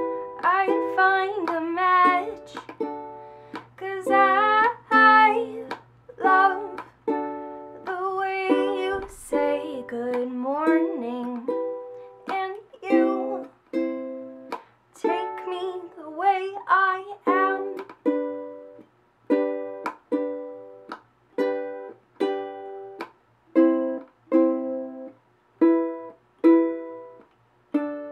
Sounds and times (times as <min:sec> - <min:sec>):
Inside, small room: 0:00.0 - 0:28.1
Ukulele: 0:00.0 - 0:28.1.